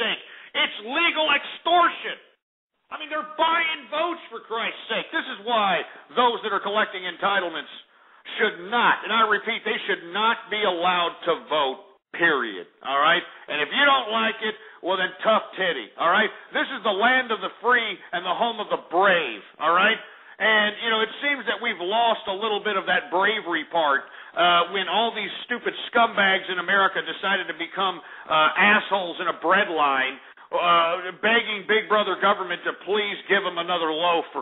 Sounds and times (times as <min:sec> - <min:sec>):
Speech: 0:00.0 - 0:02.3, 0:02.9 - 0:34.4.